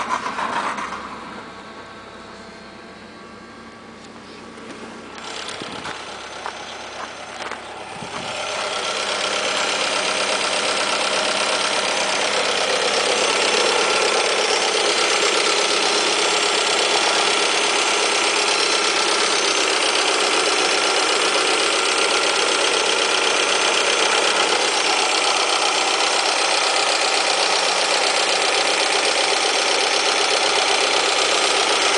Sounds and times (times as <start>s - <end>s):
Vehicle: 0.0s - 31.9s.